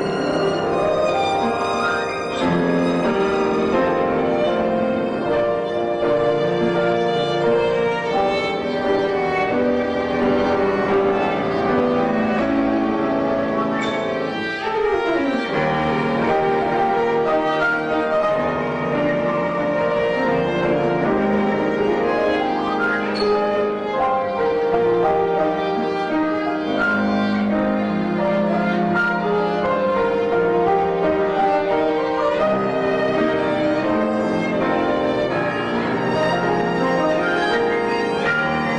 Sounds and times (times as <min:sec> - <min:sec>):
Piano: 0:00.0 - 0:38.7
Violin, fiddle: 0:00.0 - 0:38.7.